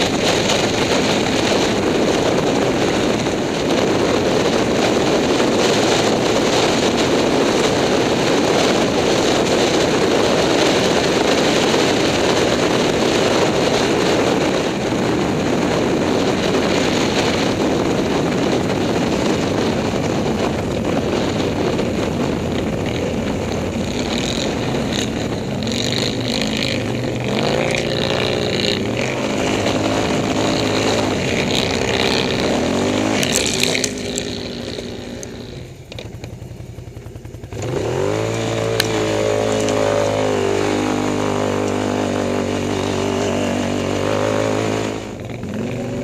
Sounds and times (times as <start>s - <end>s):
Vehicle: 0.0s - 46.0s.